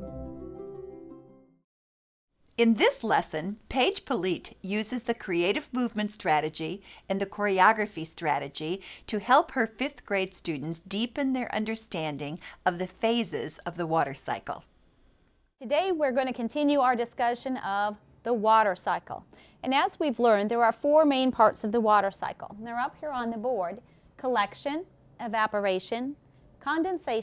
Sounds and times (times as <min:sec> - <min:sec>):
Speech: 0:02.6 - 0:14.7, 0:15.6 - 0:27.2.